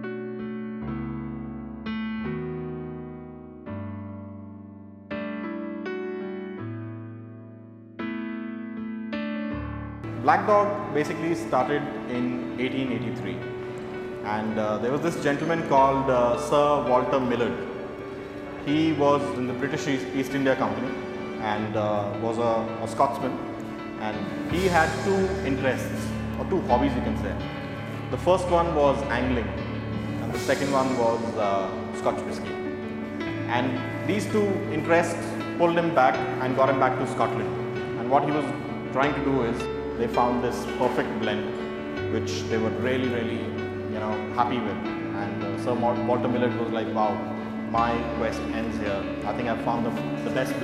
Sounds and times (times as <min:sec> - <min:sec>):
Music: 0:00.0 - 0:50.6
Speech: 0:10.2 - 0:13.4, 0:14.2 - 0:17.7, 0:18.6 - 0:23.4, 0:24.0 - 0:27.4, 0:28.1 - 0:29.6, 0:30.2 - 0:32.5, 0:33.5 - 0:41.5, 0:42.1 - 0:50.6.